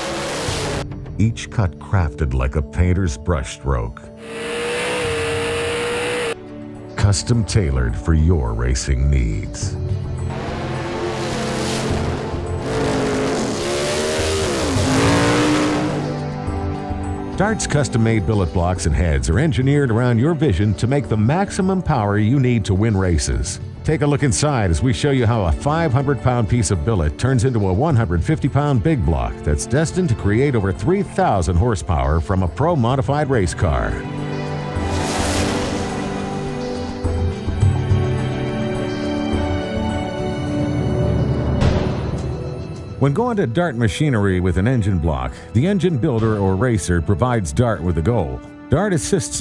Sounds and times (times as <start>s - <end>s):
Music: 0.0s - 49.4s
Speech: 1.2s - 4.2s, 7.0s - 9.8s, 17.4s - 34.0s, 43.0s - 49.4s.